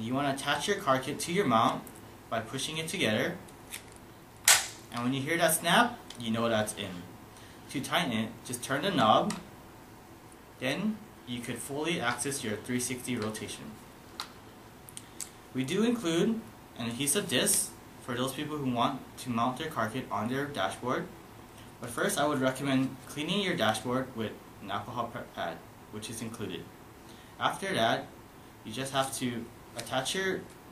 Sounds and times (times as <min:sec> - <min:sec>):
Speech: 0:00.0 - 0:03.4, 0:04.9 - 0:07.1, 0:07.7 - 0:09.5, 0:10.6 - 0:13.8, 0:15.6 - 0:21.2, 0:21.8 - 0:26.7, 0:27.4 - 0:30.5.